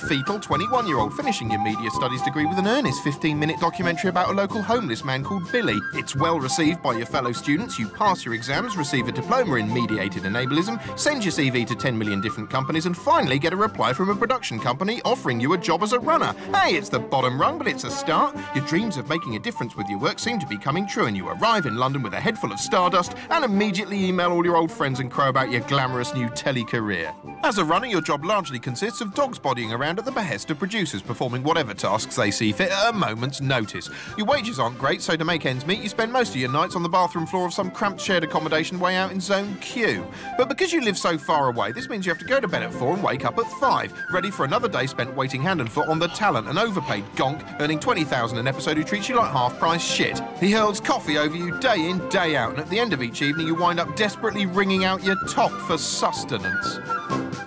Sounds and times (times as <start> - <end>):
Speech: 0.0 - 56.8
Music: 0.0 - 57.4.